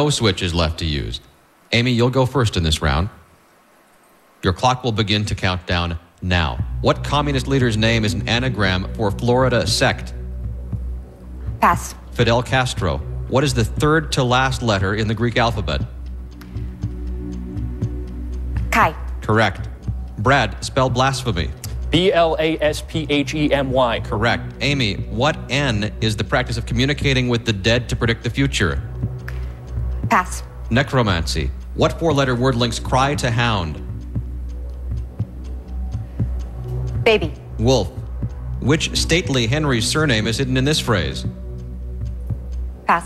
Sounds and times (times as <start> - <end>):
Speech: 0.0 - 3.2, 4.4 - 10.2, 11.6 - 15.9, 18.7 - 28.9, 30.1 - 33.8, 37.1 - 38.0, 38.6 - 41.3.